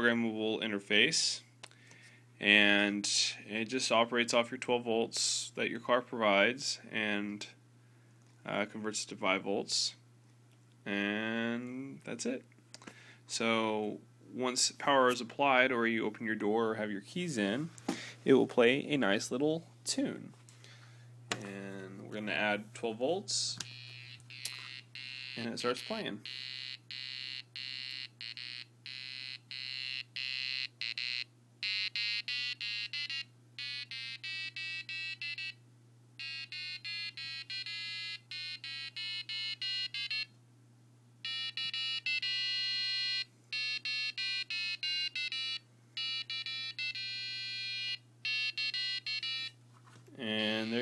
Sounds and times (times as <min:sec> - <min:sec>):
Speech: 0:08.4 - 0:10.0, 0:10.9 - 0:12.5, 0:18.3 - 0:20.4, 0:21.4 - 0:23.6, 0:25.4 - 0:26.2, 0:50.2 - 0:50.8.